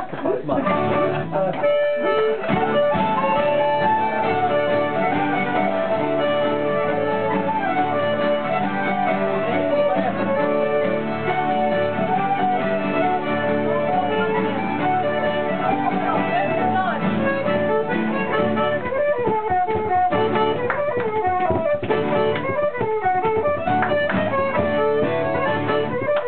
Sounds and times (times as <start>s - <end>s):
Independent music: 0.0s - 26.2s.